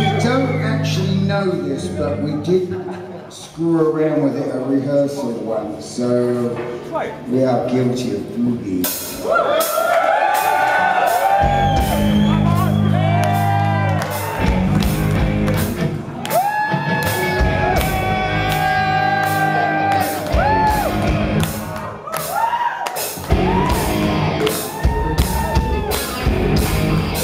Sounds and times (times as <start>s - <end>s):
Music: 8.8s - 27.2s
Whoop: 9.2s - 14.6s, 16.2s - 21.1s, 21.8s - 26.2s.